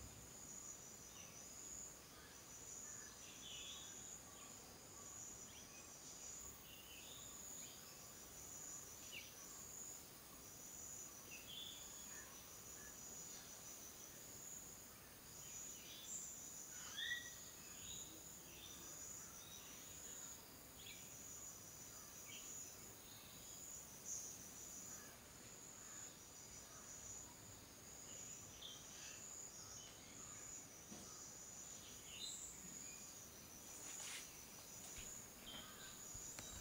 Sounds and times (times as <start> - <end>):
Bird: 15.4 - 20.3, 34.9 - 36.6.